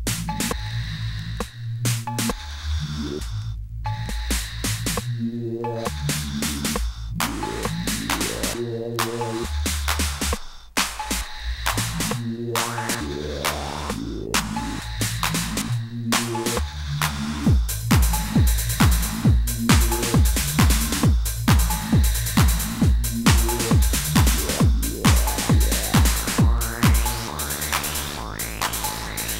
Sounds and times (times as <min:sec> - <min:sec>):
Music: 0:00.0 - 0:29.3.